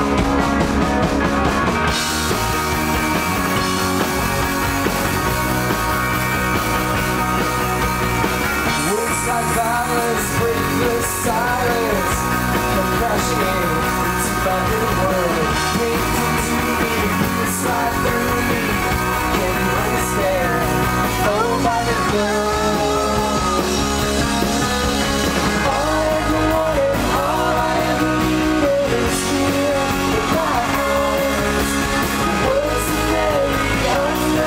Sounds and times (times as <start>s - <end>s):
Music: 0.0s - 34.4s.